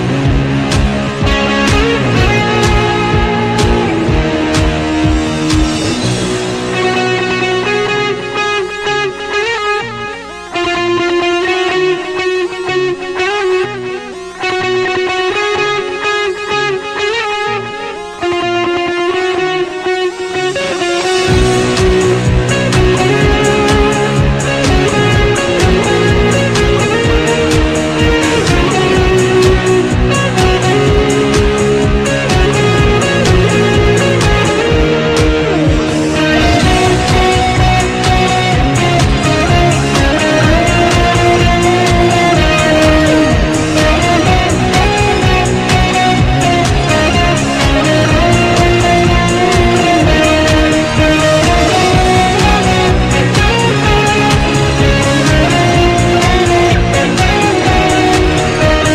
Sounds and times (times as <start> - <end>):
Electric guitar: 0.0 - 58.9.